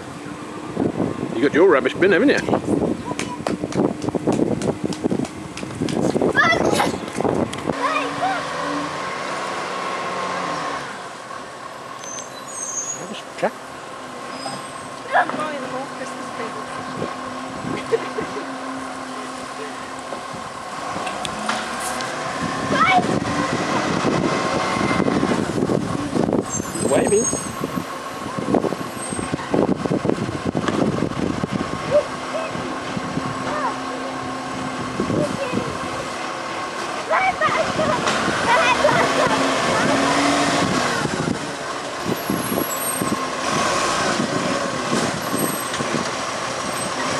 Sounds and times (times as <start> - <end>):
Truck: 0.0 - 47.1.